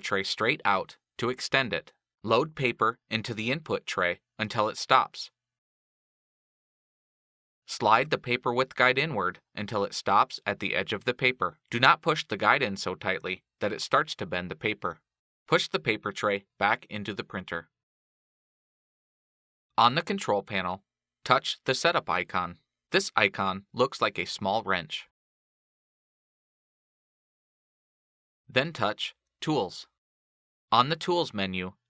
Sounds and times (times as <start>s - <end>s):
Speech: 0.0s - 5.4s, 7.7s - 17.7s, 19.8s - 25.2s, 28.5s - 30.0s, 30.8s - 31.8s.